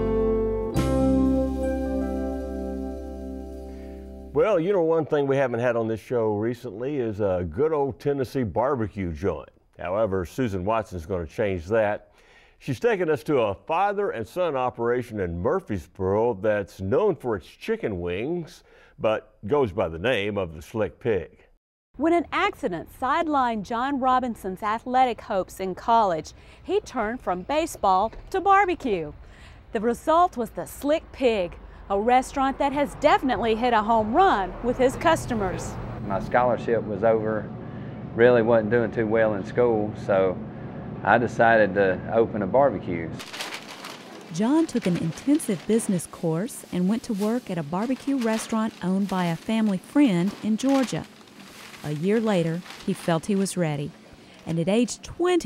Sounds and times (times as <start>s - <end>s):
Speech: 4.4s - 12.0s, 12.6s - 29.1s, 29.8s - 37.5s, 38.2s - 40.4s, 41.0s - 43.2s, 44.4s - 51.1s, 51.9s - 53.9s, 54.5s - 55.4s.